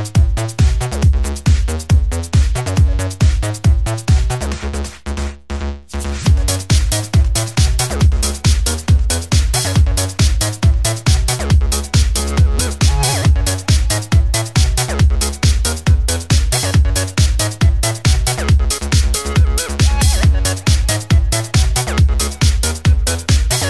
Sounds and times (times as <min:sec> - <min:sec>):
Music: 0:00.0 - 0:23.7.